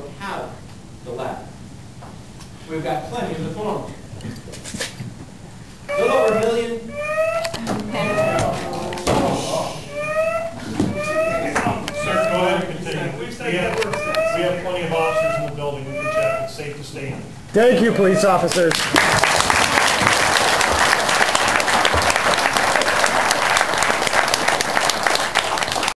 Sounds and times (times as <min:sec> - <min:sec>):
Speech: 0:11.1 - 0:18.8.